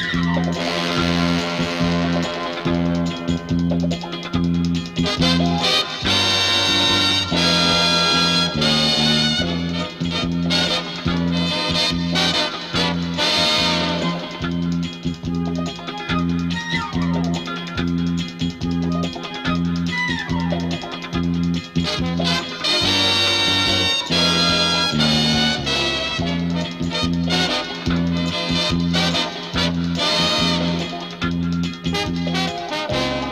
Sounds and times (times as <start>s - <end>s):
Funny music: 0.0s - 33.3s.